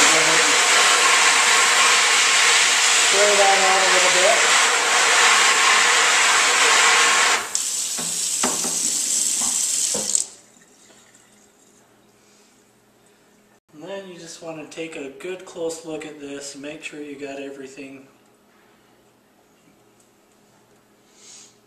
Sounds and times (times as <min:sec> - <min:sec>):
Sink (filling or washing): 0:00.0 - 0:11.5
Speech: 0:03.1 - 0:04.5, 0:13.7 - 0:18.2.